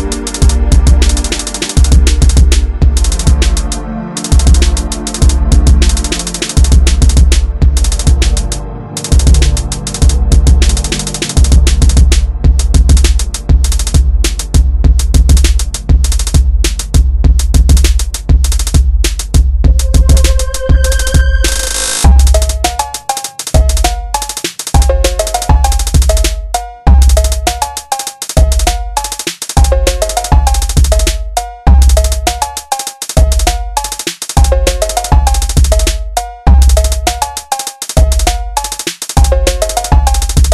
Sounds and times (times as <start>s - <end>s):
Techno: 0.0s - 24.0s.